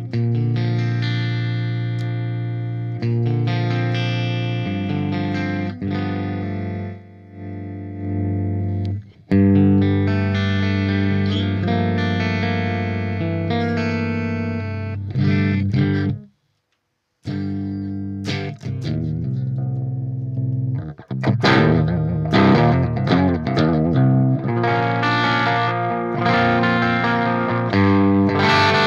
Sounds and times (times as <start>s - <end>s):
Guitar: 0.0s - 16.6s, 17.2s - 28.8s
Effects unit: 0.0s - 28.8s.